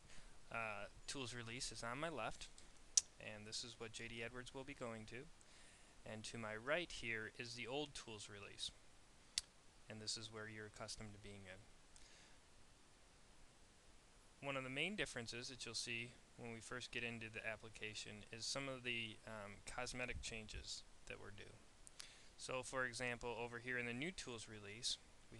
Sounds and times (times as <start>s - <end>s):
Speech: 0.5s - 2.5s, 3.2s - 5.3s, 6.0s - 8.8s, 9.9s - 11.7s, 14.4s - 21.7s, 22.4s - 25.3s.